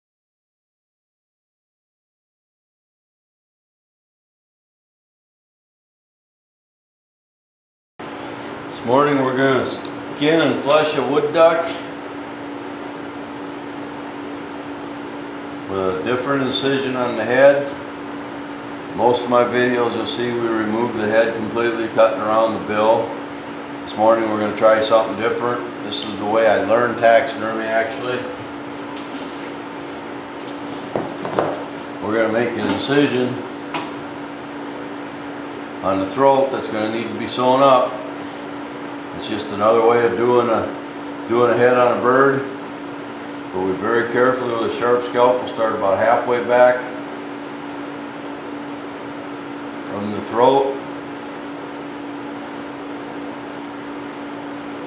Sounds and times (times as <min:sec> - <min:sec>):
Speech: 0:08.8 - 0:11.9, 0:15.7 - 0:17.8, 0:19.0 - 0:23.2, 0:23.9 - 0:28.4, 0:32.0 - 0:33.5, 0:35.8 - 0:38.1, 0:39.2 - 0:42.6, 0:43.5 - 0:47.0, 0:49.9 - 0:50.9.